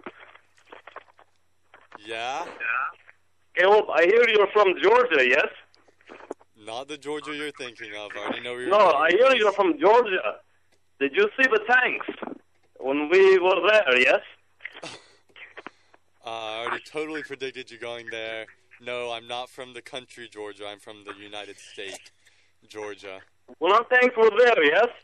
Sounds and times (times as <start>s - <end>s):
Radio: 0.0s - 1.0s, 2.0s - 10.4s, 11.0s - 25.0s
Speech: 2.0s - 2.9s, 3.6s - 5.6s, 6.6s - 10.4s, 11.0s - 12.2s, 12.8s - 14.3s, 16.2s - 22.1s, 22.7s - 25.0s.